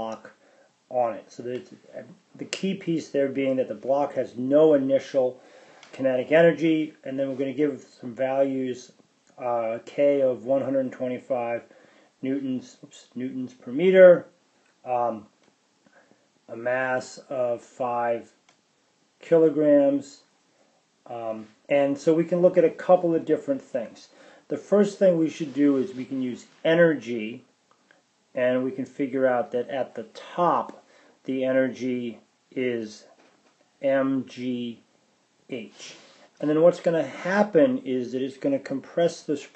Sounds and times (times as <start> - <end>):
Speech: 0.0 - 15.4, 16.5 - 18.4, 19.2 - 20.3, 21.1 - 27.5, 28.4 - 33.2, 33.8 - 34.9, 35.5 - 39.5.